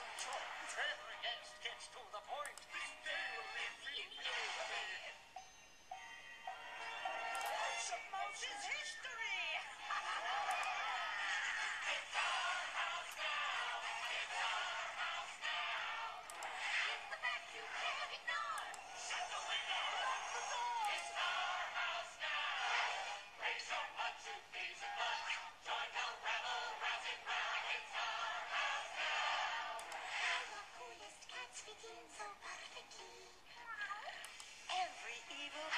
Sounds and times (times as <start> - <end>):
Happy music: 0.0 - 33.2.